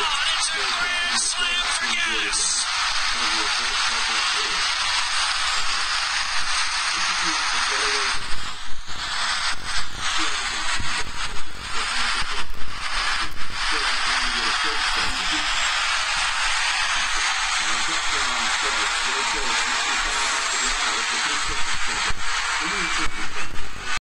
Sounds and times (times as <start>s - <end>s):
Speech: 0.0s - 4.7s, 6.9s - 8.3s, 10.1s - 12.5s, 13.2s - 15.5s, 17.6s - 24.0s.